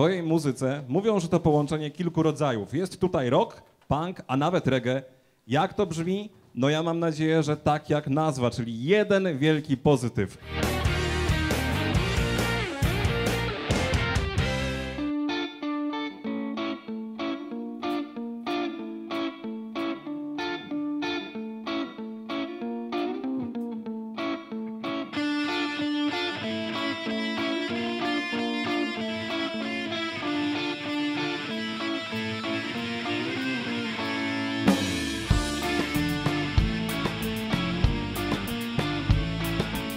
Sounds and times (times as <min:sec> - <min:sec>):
Speech: 0:00.0 - 0:10.4
Exciting music: 0:10.4 - 0:15.0, 0:34.6 - 0:39.9.